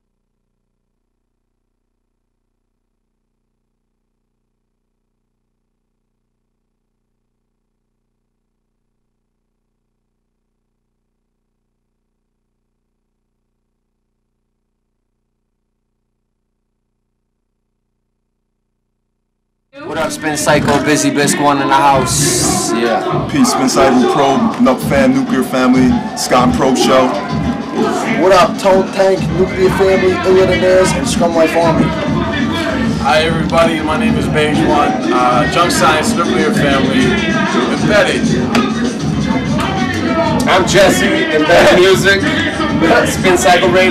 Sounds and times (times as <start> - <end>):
Speech: 19.8 - 27.2, 27.8 - 31.9, 33.0 - 38.2, 40.4 - 43.9.